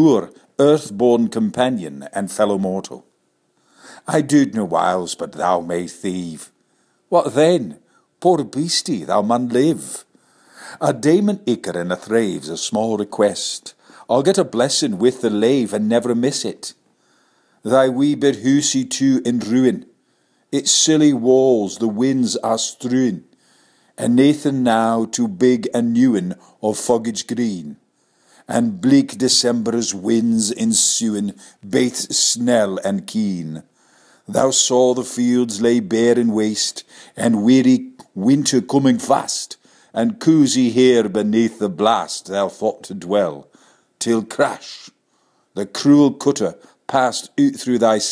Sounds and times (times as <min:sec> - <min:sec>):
Speech: 0:00.0 - 0:03.1, 0:04.0 - 0:10.1, 0:10.8 - 0:16.8, 0:17.6 - 0:19.9, 0:20.6 - 0:23.3, 0:24.0 - 0:27.8, 0:28.5 - 0:33.7, 0:34.3 - 0:45.0, 0:45.6 - 0:48.1.